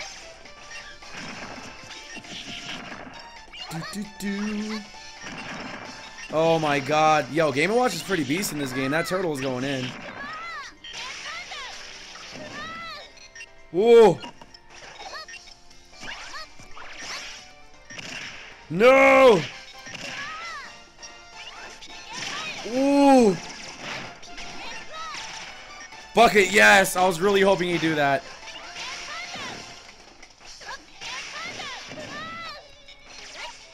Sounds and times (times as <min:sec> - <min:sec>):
Music: 0:00.0 - 0:33.7
Speech: 0:03.7 - 0:04.9.